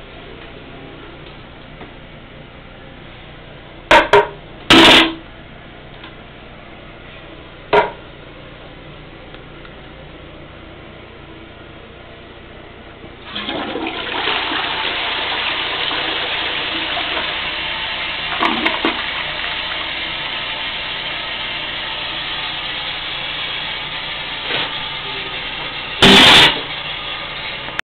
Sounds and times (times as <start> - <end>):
Toilet flush: 13.2 - 27.8.